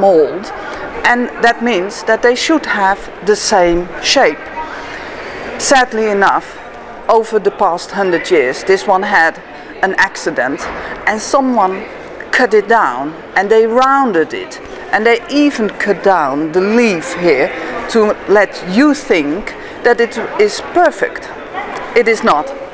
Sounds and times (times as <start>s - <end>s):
Speech: 0.0s - 4.8s, 5.6s - 22.7s.